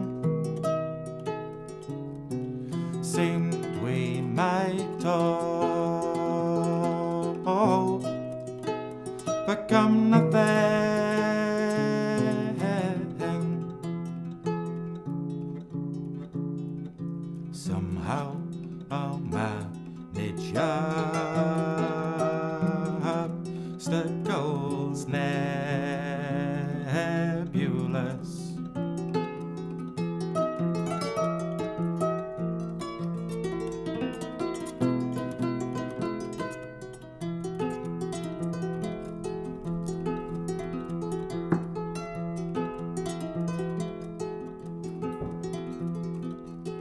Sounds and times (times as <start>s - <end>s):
Harp: 0.0s - 46.8s
Plucked string instrument: 0.0s - 46.8s.